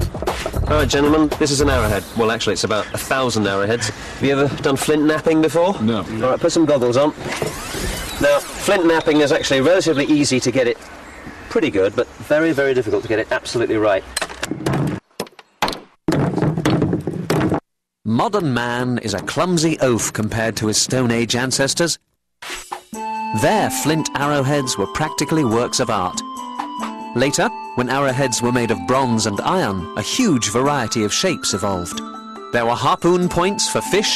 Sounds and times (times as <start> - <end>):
Speech: 0.7 - 7.2, 8.2 - 10.8, 11.5 - 14.1, 18.1 - 22.0, 23.4 - 26.2, 27.2 - 32.0, 32.6 - 34.1.